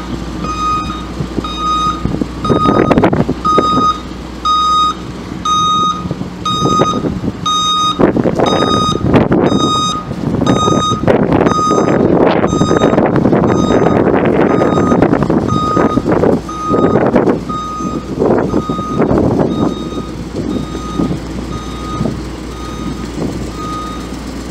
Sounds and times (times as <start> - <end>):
Reversing beeps: 0.4 - 23.0, 23.6 - 24.1.